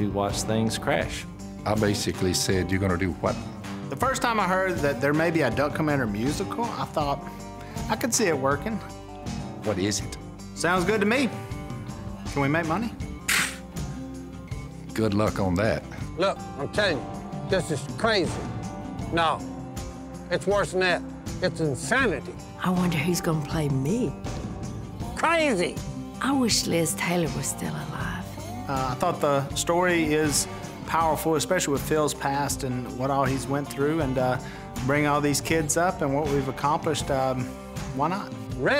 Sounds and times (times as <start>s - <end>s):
Music: 0.0s - 38.7s.